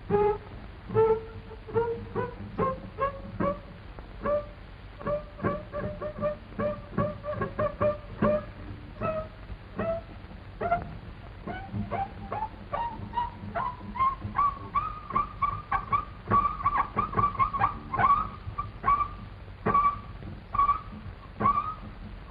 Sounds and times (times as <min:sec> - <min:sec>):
Music: 0:00.0 - 0:22.3.